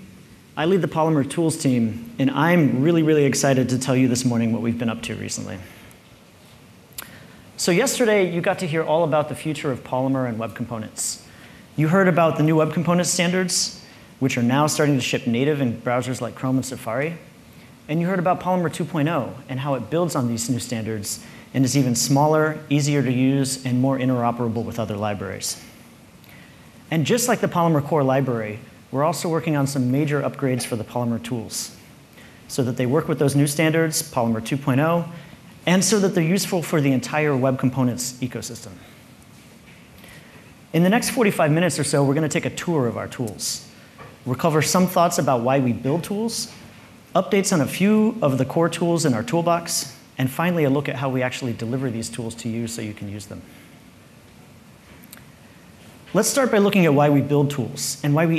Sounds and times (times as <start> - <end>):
Speech: 0.6 - 5.7, 7.6 - 17.3, 17.9 - 25.7, 26.9 - 31.8, 32.5 - 39.0, 40.7 - 53.5, 56.1 - 58.3.